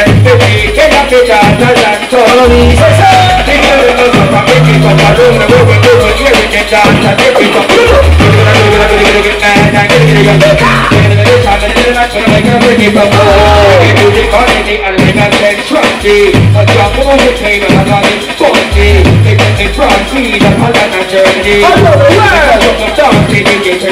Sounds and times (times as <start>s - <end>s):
Hip hop music: 0.0s - 23.9s
Singing: 0.0s - 23.9s.